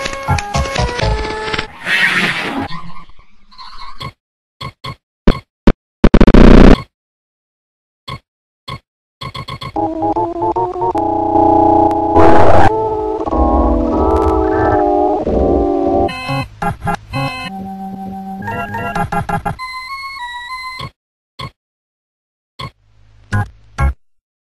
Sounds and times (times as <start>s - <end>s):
Harmonic: 9.8s - 16.3s.